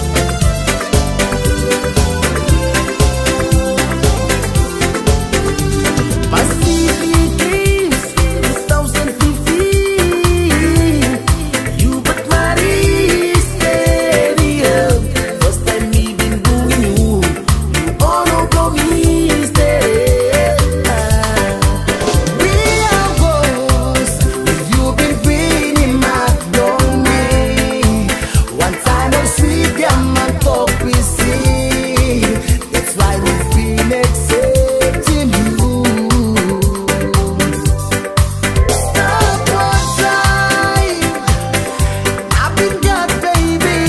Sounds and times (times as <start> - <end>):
Music: 0.0 - 43.8.